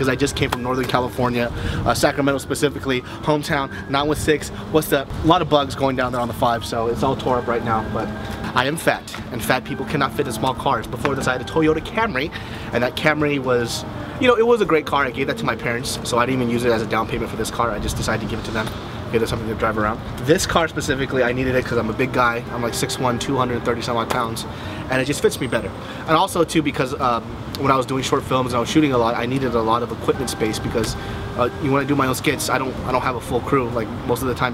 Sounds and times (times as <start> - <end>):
Music: 0.0 - 34.5
Speech: 0.0 - 34.5.